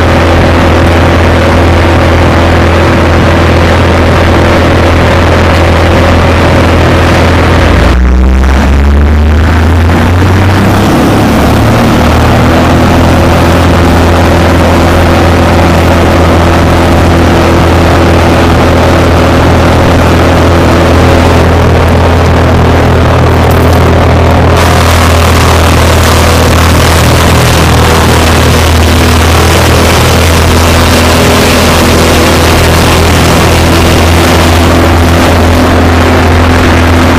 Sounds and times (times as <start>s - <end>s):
Vehicle: 0.0s - 37.1s.